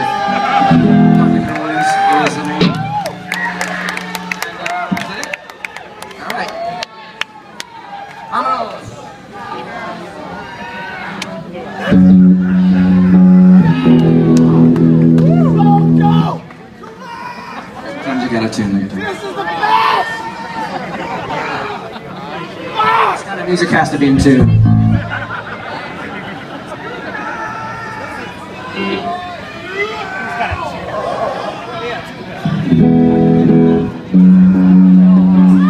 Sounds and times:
Music: 0:00.4 - 0:05.1, 0:11.9 - 0:16.4, 0:32.4 - 0:35.7.

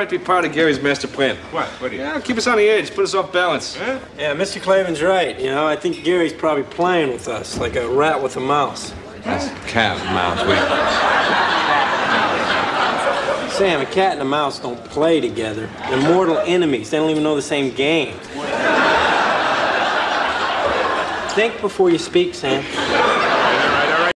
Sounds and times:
Speech: 0:21.3 - 0:22.7.

